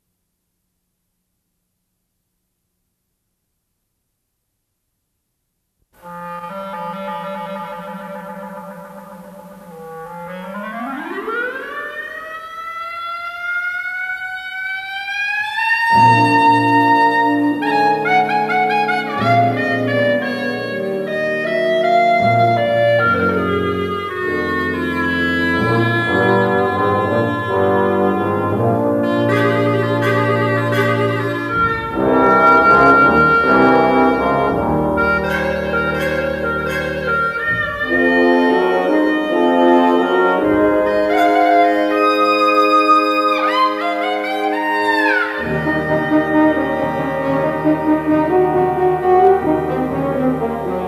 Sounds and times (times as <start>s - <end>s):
Bowed string instrument: 15.6s - 50.8s.